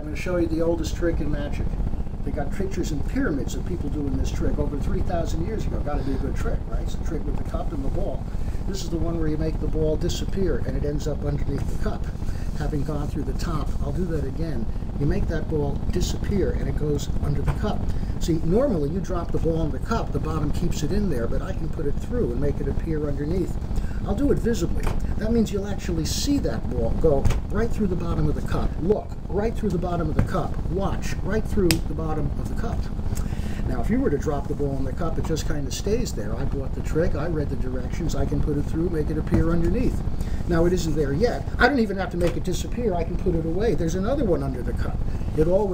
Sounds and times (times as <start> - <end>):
Speech: 0.0 - 33.0, 33.6 - 45.7.